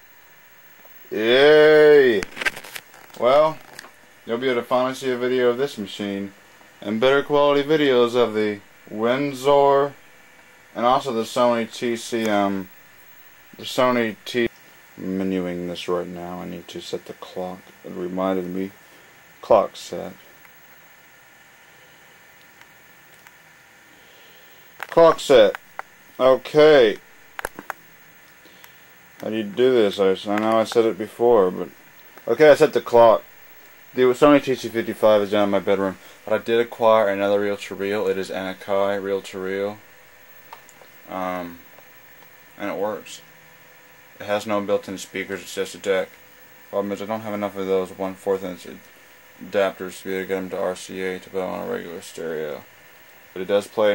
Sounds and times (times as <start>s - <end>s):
Speech: 1.1s - 2.3s, 3.2s - 3.6s, 4.3s - 10.0s, 10.8s - 12.7s, 13.6s - 18.8s, 19.4s - 20.2s, 24.9s - 25.6s, 26.2s - 27.0s, 29.2s - 33.2s, 33.9s - 39.8s, 41.0s - 41.6s, 42.6s - 43.2s, 44.2s - 48.8s, 49.4s - 52.7s, 53.4s - 53.9s.